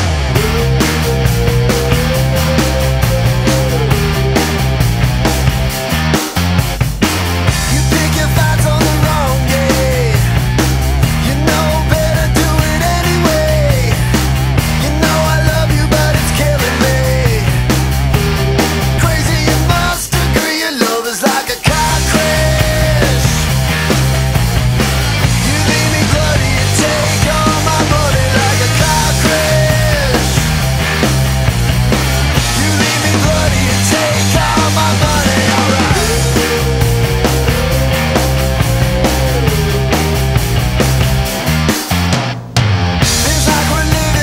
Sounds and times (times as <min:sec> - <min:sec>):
Music: 0:00.0 - 0:44.2.